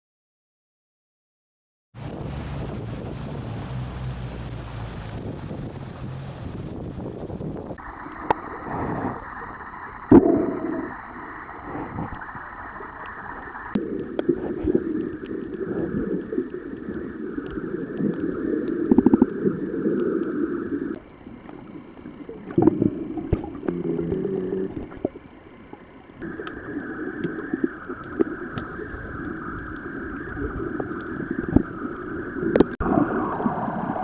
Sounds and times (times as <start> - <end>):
Boat, Water vehicle: 2.0 - 14.8, 20.8 - 26.8.